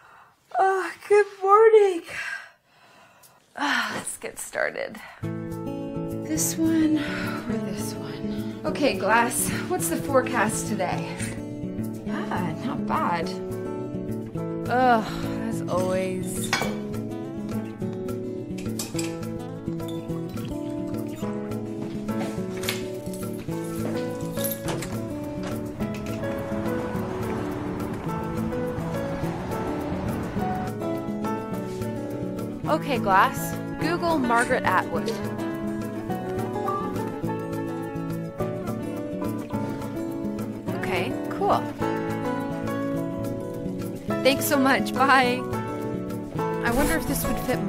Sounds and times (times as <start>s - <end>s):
Speech: 0.5s - 2.3s, 6.3s - 8.0s, 8.6s - 11.2s, 12.1s - 13.4s, 14.7s - 16.5s, 32.7s - 35.2s, 40.7s - 41.7s, 44.2s - 45.4s, 46.6s - 47.6s
Music: 2.7s - 47.6s.